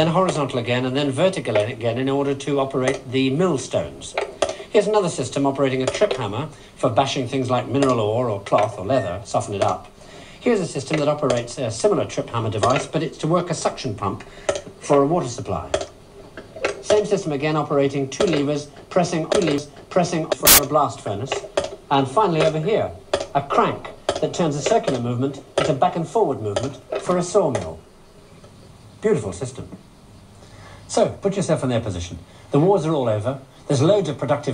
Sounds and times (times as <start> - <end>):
Speech: 0.0 - 15.9, 16.8 - 27.8, 29.0 - 29.8, 30.9 - 34.5.